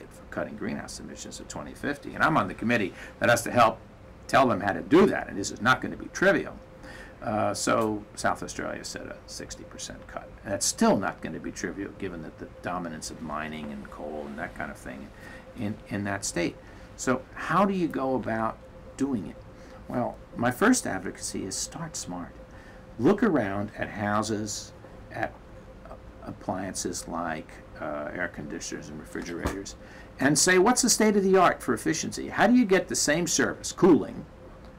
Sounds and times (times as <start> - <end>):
Speech: 0.0 - 6.6, 7.2 - 22.4, 23.0 - 34.3.